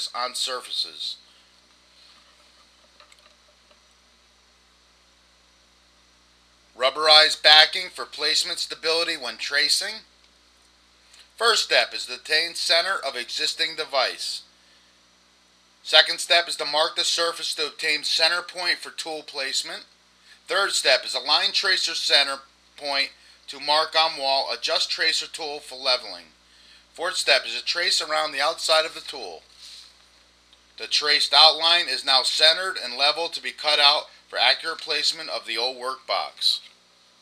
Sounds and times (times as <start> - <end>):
Speech: 0.0 - 1.2, 6.8 - 10.1, 11.4 - 14.5, 15.8 - 19.9, 20.5 - 26.4, 27.0 - 29.4, 30.8 - 36.7.